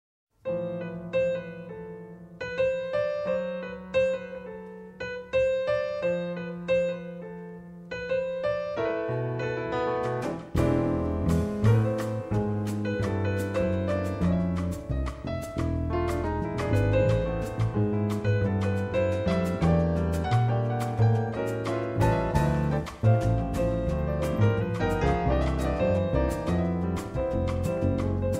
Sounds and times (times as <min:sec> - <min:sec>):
Piano: 0:00.3 - 0:28.3.